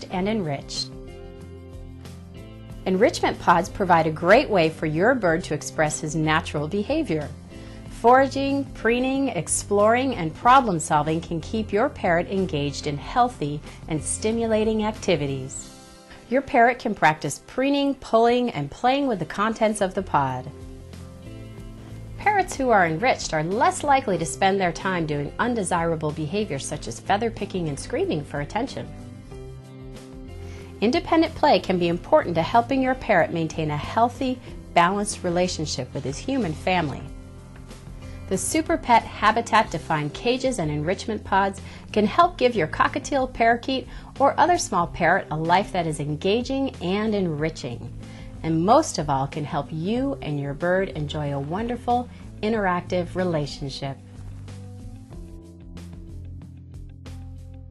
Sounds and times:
Speech: 0.0s - 0.9s, 2.9s - 7.3s, 8.0s - 15.7s, 16.3s - 20.5s, 22.2s - 28.9s, 30.8s - 37.1s, 38.3s - 54.0s
Music: 0.0s - 57.7s.

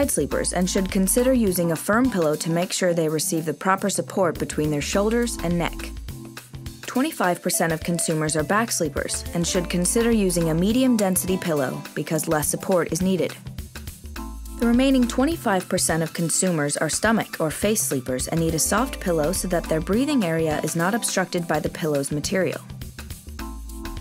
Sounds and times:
Speech: 0.0s - 5.9s, 6.9s - 13.4s, 14.6s - 22.7s
Music: 0.0s - 24.0s.

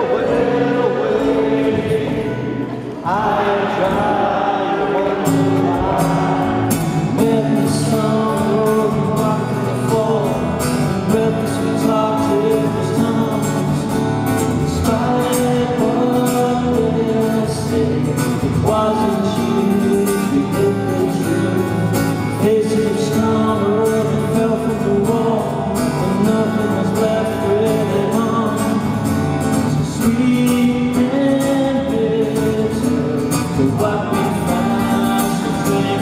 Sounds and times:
Music: 0.0s - 36.0s.

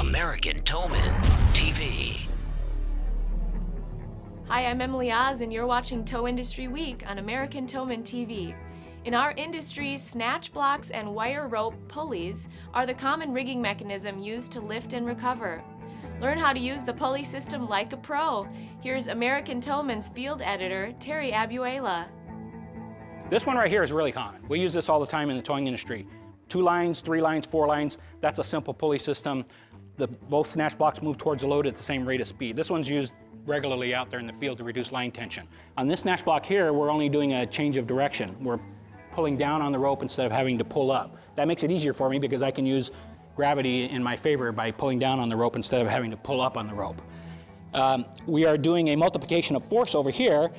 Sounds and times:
Speech: 0.0s - 2.3s
Music: 0.0s - 50.5s.

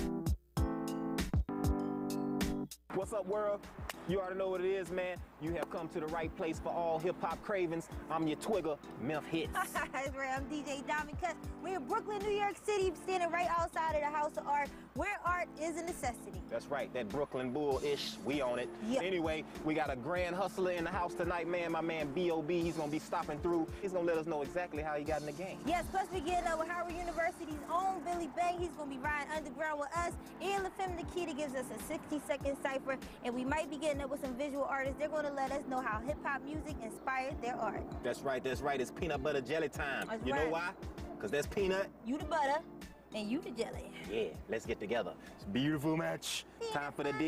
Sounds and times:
Music: 0.0s - 47.2s.

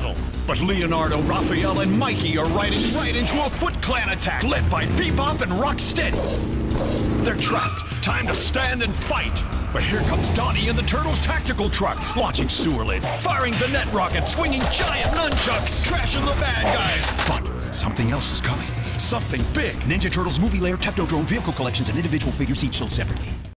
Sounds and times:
Speech: 0.0s - 6.2s, 7.2s - 23.5s
Music: 0.0s - 23.5s.

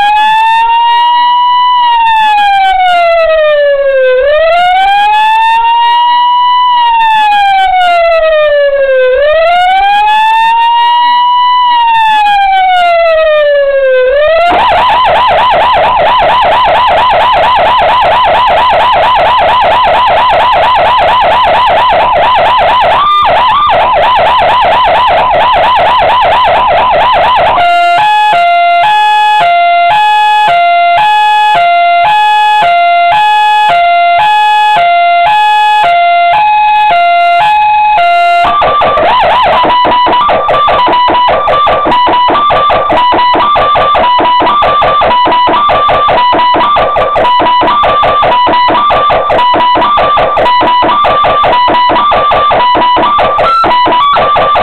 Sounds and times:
Police car (siren): 0.0s - 54.6s.

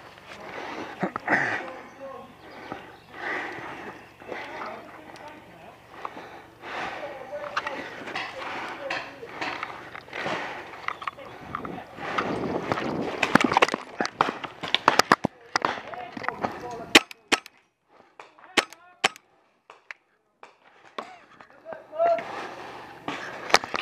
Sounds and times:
Speech: 4.4s - 5.8s, 6.9s - 9.4s, 15.3s - 17.0s, 21.5s - 22.3s.

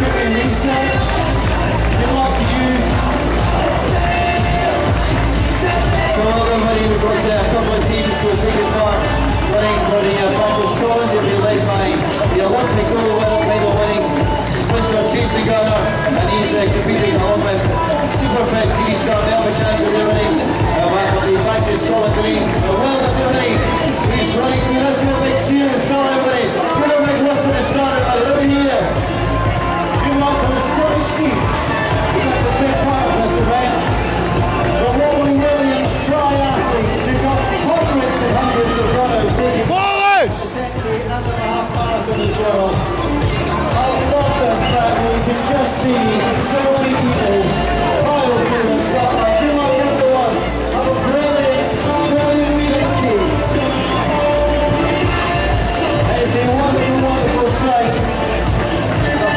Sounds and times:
Music: 0.0s - 59.3s
Run: 0.0s - 59.3s
Speech: 0.0s - 59.3s.

